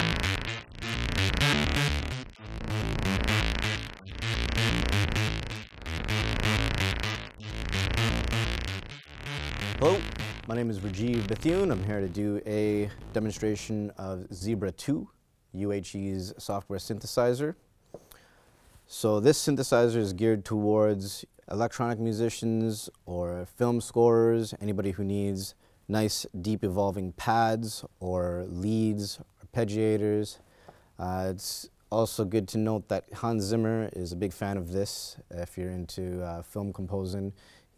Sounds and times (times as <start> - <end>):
Sampler: 0.0 - 13.7
Speech: 9.8 - 17.6, 18.9 - 30.4, 31.0 - 37.4.